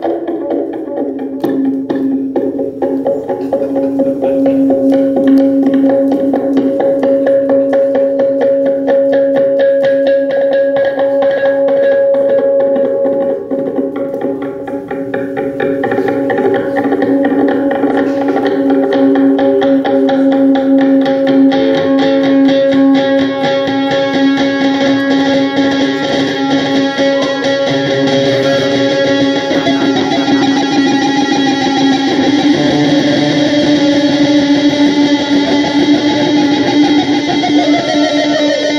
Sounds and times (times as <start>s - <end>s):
Music: 0.0s - 38.7s.